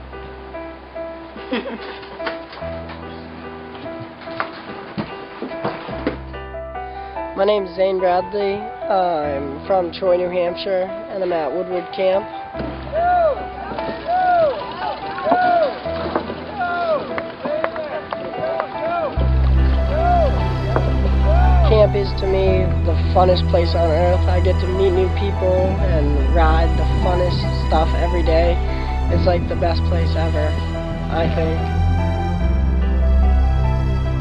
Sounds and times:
Music: 0.0 - 34.2
Speech: 7.4 - 12.3, 21.3 - 30.5, 31.1 - 31.6.

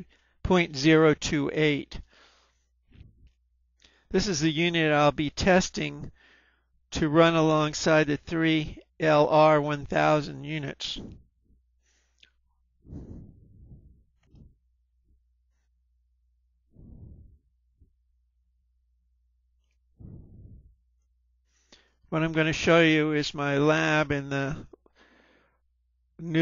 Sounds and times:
Speech: 0.0 - 2.1, 4.2 - 6.1, 7.0 - 11.2, 22.2 - 24.7, 26.2 - 26.4.

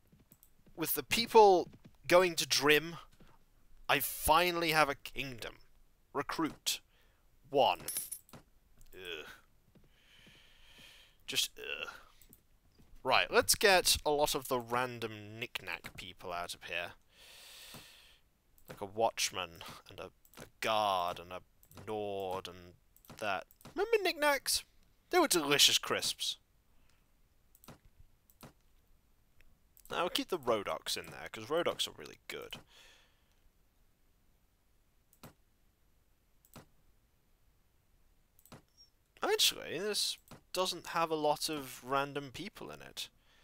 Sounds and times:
Clicking: 0.2 - 0.5, 26.9 - 28.6, 29.4 - 30.0, 38.4 - 38.9
Speech: 0.8 - 3.1, 3.9 - 6.9, 7.5 - 8.0, 8.9 - 9.4, 11.3 - 12.0, 13.0 - 17.0, 18.7 - 26.4, 29.9 - 32.6, 39.2 - 43.1.

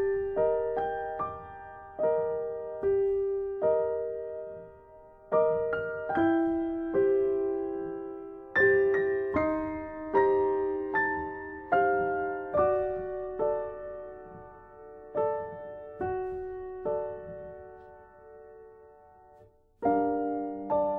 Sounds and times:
Music: 0.0 - 20.9.

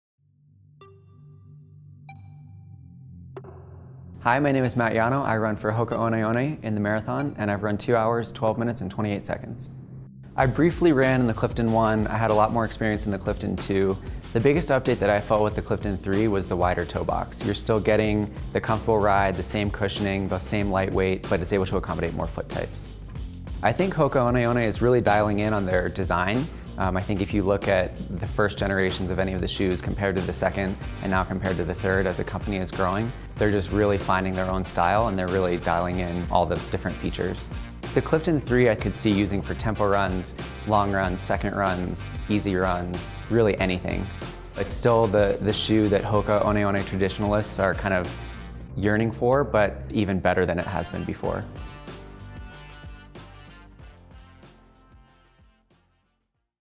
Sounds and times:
Music: 0.2 - 56.6
Speech: 4.2 - 9.7, 10.4 - 23.0, 23.6 - 48.2, 48.8 - 51.5.

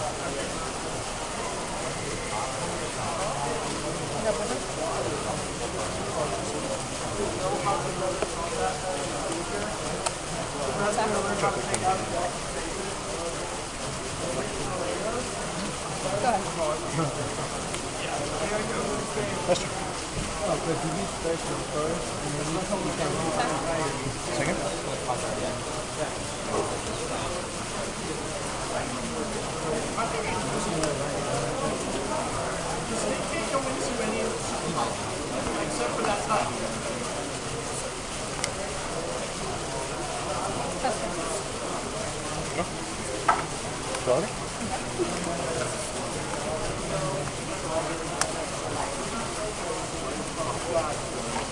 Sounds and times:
Speech: 0.0 - 51.5.

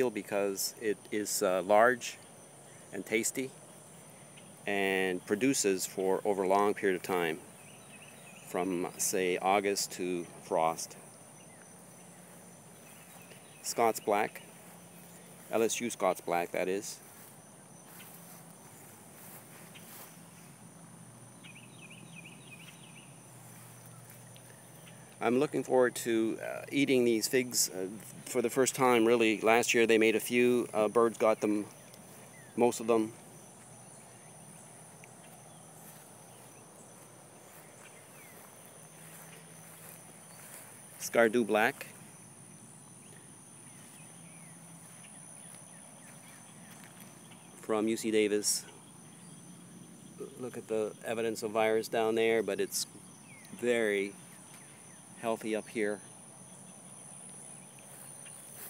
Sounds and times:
Speech: 0.0 - 2.2, 3.0 - 3.5, 4.7 - 7.5, 8.5 - 11.0, 13.6 - 14.4, 15.5 - 17.0, 25.2 - 31.7, 32.6 - 33.2, 41.0 - 41.9, 47.6 - 48.7, 50.2 - 52.9, 53.6 - 54.2, 55.2 - 56.0.

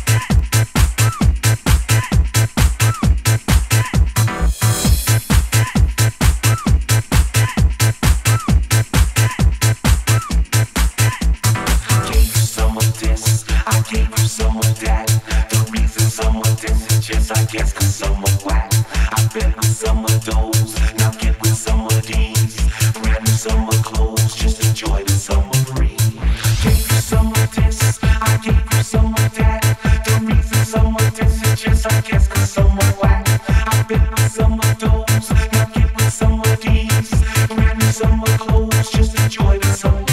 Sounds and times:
Music: 0.0 - 40.1.

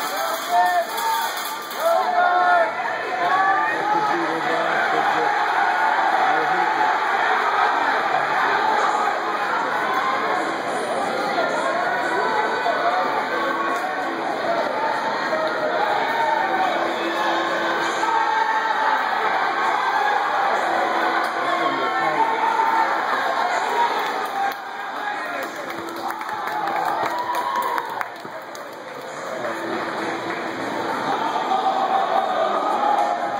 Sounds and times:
Run: 22.2 - 31.8.

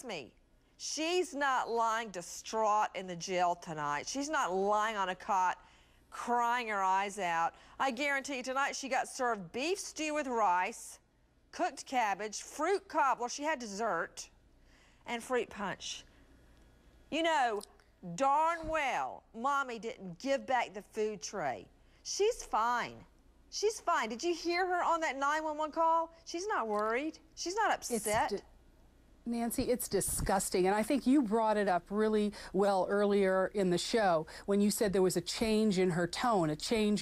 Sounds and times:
Speech: 17.2 - 28.5, 29.3 - 37.0.

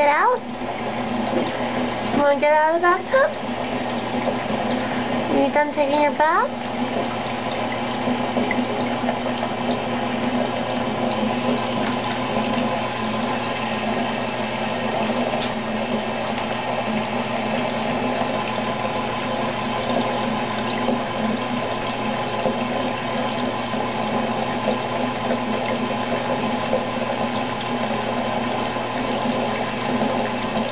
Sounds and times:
Speech: 0.0 - 0.5, 2.1 - 3.4, 5.3 - 6.6.

